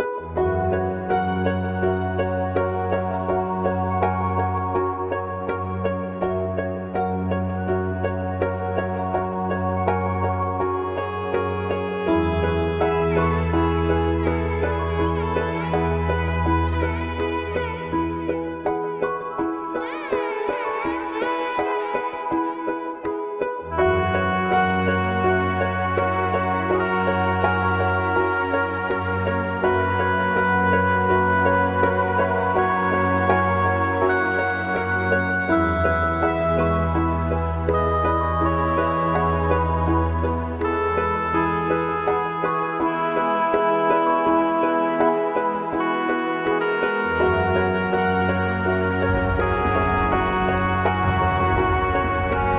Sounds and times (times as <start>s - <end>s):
Background music: 0.0s - 52.5s.